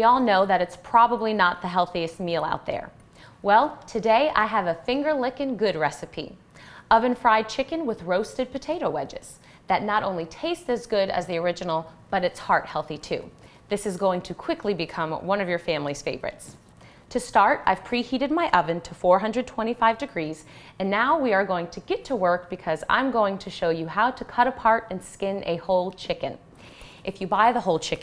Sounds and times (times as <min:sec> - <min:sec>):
Speech: 0:00.0 - 0:26.4, 0:27.1 - 0:28.0.